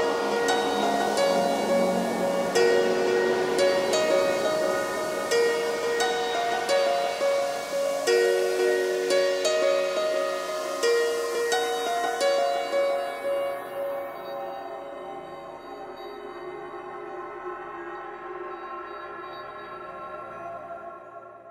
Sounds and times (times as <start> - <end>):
Electronic music: 0.0 - 20.8.